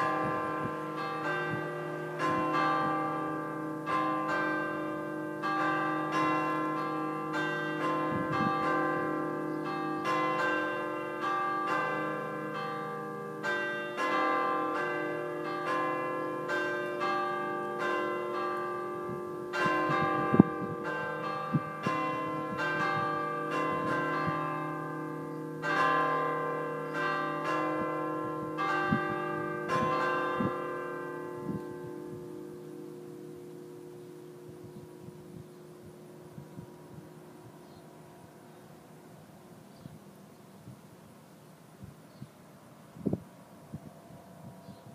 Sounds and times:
Change ringing (campanology): 0.0s - 39.6s.

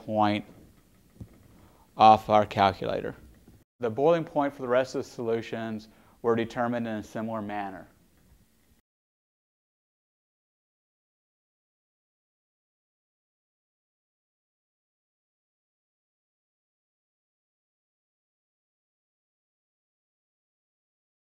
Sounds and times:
Speech: 0.0s - 0.5s, 2.0s - 3.2s, 3.8s - 7.9s.

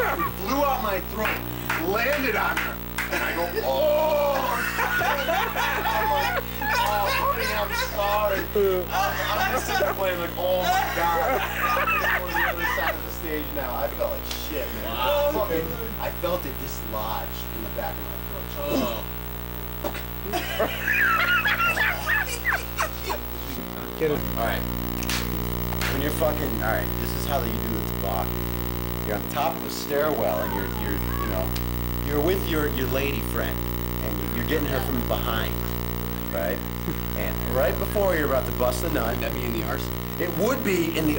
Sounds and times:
Inside, small room: 0.0s - 41.1s
Speech: 6.6s - 19.0s, 25.8s - 28.3s, 29.1s - 35.6s, 37.2s - 41.1s.

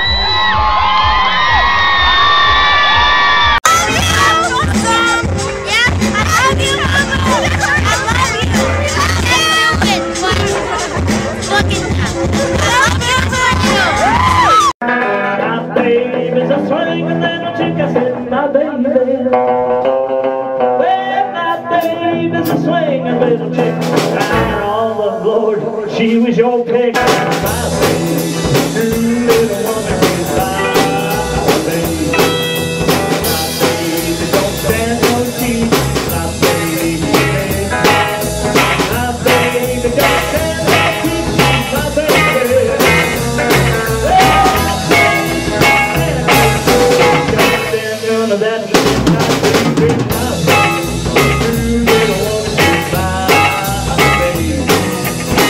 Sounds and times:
Music: 0.0s - 55.4s
Speech: 3.7s - 14.0s.

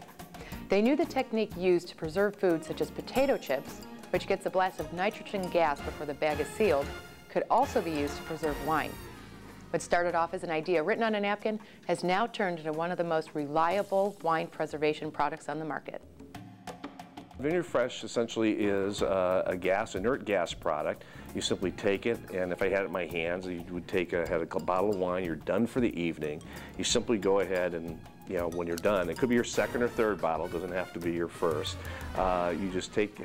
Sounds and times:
Music: 0.0s - 33.2s
Speech: 0.7s - 3.6s, 4.2s - 8.9s, 9.8s - 16.0s, 17.4s - 33.2s.

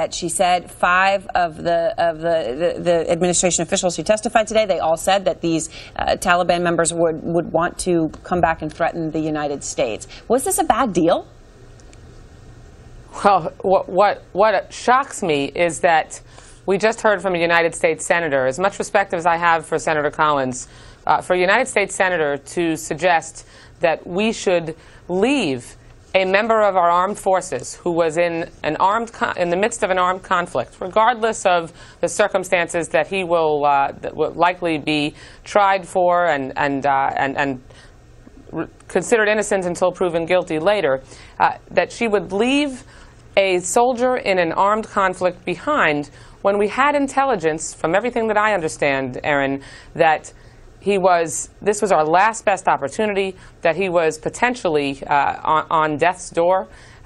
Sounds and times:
Speech: 0.0s - 11.3s, 13.2s - 37.6s, 38.4s - 42.8s, 43.4s - 56.7s.

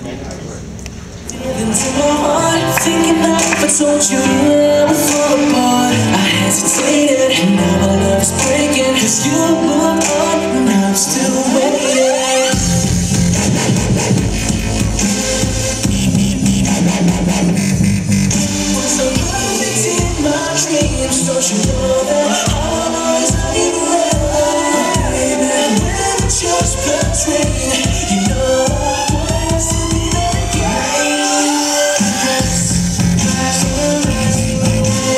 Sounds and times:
Dubstep: 1.4s - 35.1s.

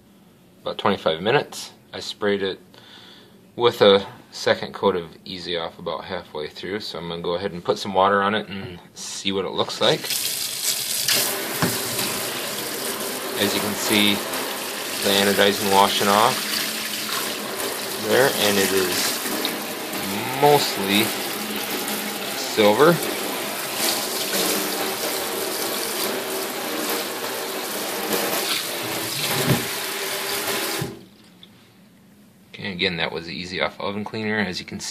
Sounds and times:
Speech: 0.6s - 2.6s, 3.6s - 10.1s, 13.4s - 14.3s, 15.0s - 16.4s, 18.0s - 19.2s, 20.0s - 21.2s, 22.4s - 23.1s, 32.5s - 34.9s
Gush: 10.0s - 31.0s.

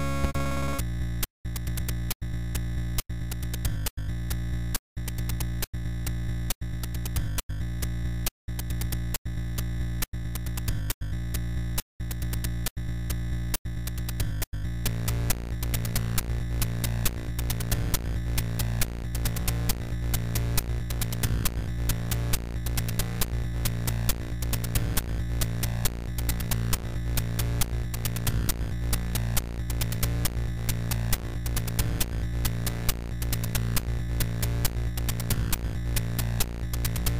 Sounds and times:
Music: 0.0s - 0.8s, 13.8s - 37.1s.

